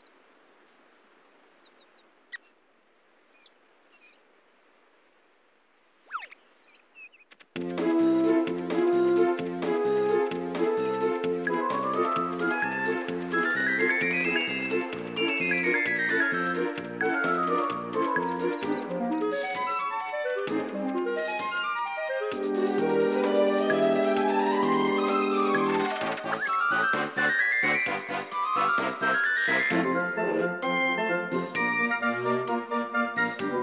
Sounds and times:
Music: 7.6s - 33.6s.

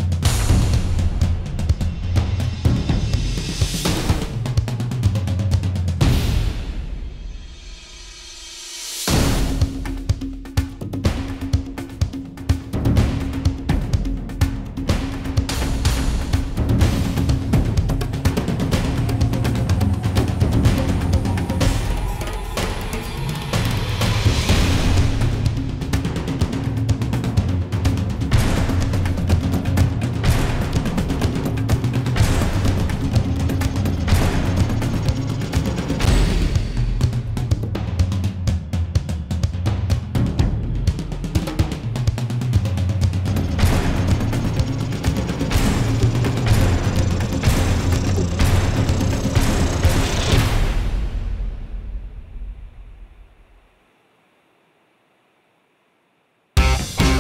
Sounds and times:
Music: 0.0s - 57.2s.

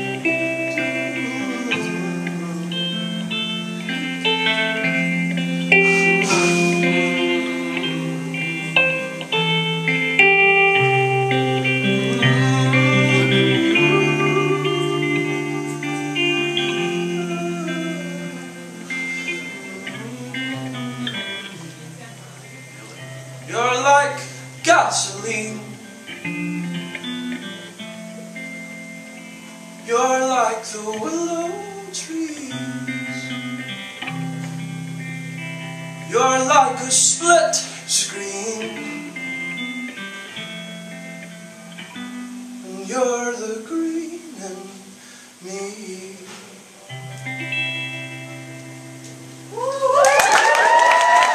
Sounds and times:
Guitar: 0.0s - 51.3s
Inside, large room or hall: 48.4s - 51.3s.

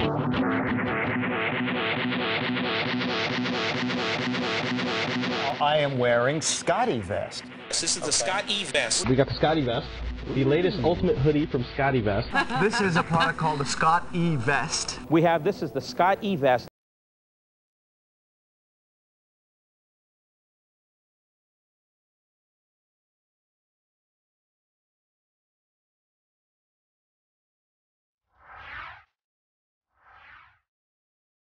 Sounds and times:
Speech: 5.5s - 16.7s.

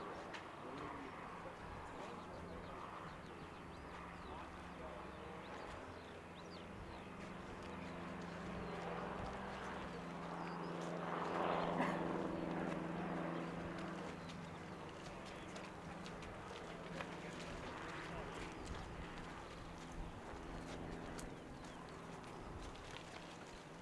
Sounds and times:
Speech: 0.0s - 6.2s, 6.9s - 21.7s.

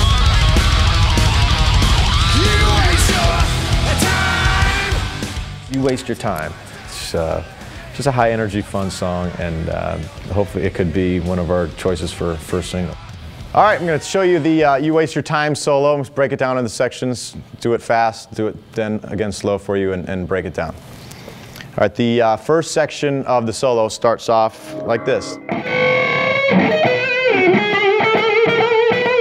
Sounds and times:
Music: 0.0s - 14.0s, 24.6s - 29.2s
Speech: 5.7s - 20.8s, 21.8s - 25.4s.

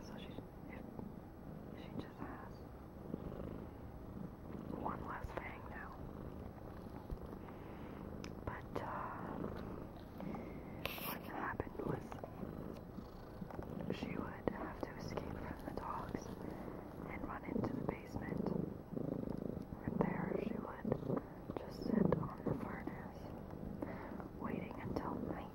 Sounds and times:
Whispering: 0.0s - 0.9s, 1.7s - 2.6s, 4.7s - 6.1s, 8.3s - 9.6s, 10.8s - 12.4s, 13.9s - 18.7s, 19.8s - 23.3s, 24.2s - 25.5s
Purr: 0.0s - 25.5s.

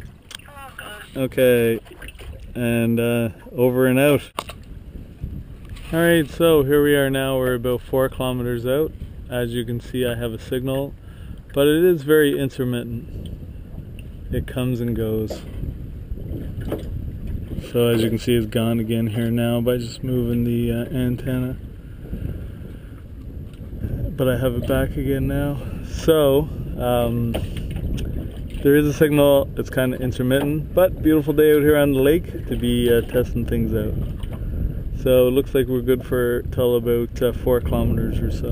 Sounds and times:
Speech: 2.6s - 4.3s, 11.6s - 13.0s, 14.4s - 15.4s, 17.6s - 21.6s, 24.2s - 27.4s, 28.7s - 33.9s, 35.0s - 38.5s.

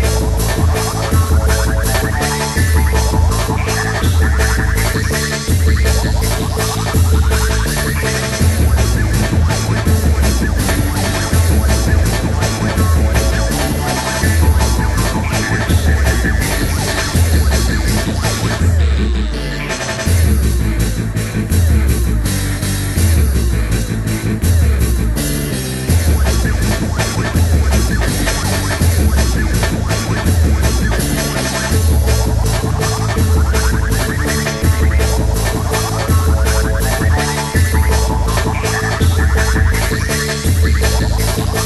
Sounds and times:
Music: 0.0s - 41.6s.

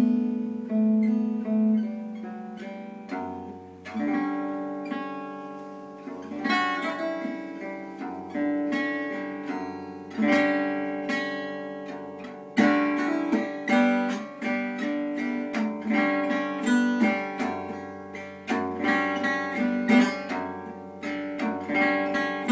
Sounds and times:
Acoustic guitar: 0.0s - 22.5s
Strum: 0.0s - 22.5s.

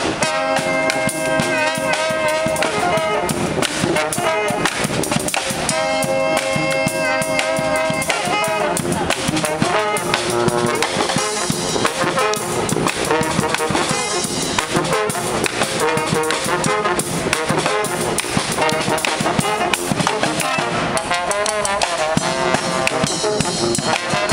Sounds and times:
Independent music: 0.0s - 24.3s.

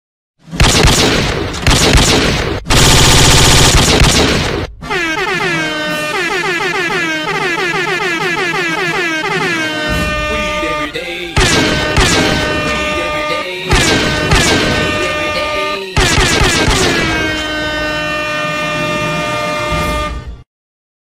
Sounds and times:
Music: 8.6s - 20.5s.

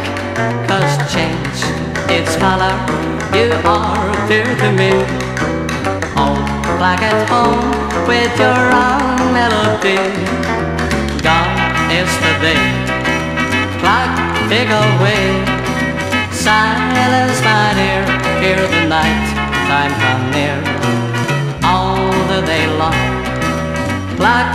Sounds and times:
Music: 0.0s - 24.5s.

